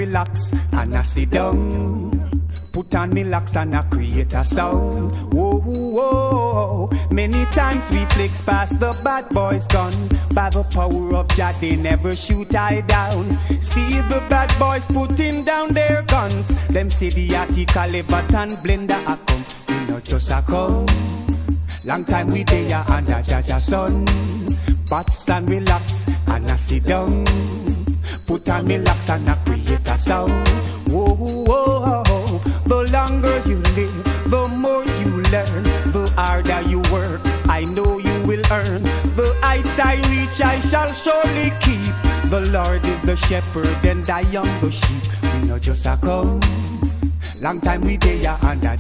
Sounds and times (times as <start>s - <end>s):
Funk: 0.0s - 48.8s.